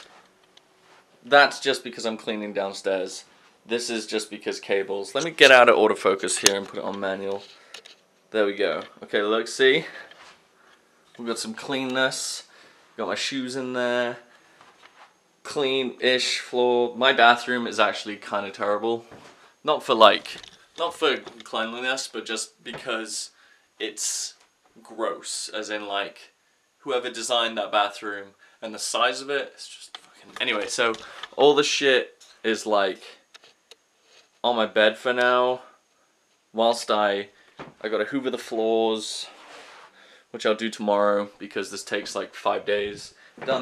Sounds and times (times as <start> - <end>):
Inside, small room: 0.0 - 43.6
Speech: 1.2 - 7.5, 8.3 - 10.1, 11.2 - 14.3, 15.5 - 33.3, 34.4 - 35.8, 36.6 - 39.4, 40.3 - 43.6.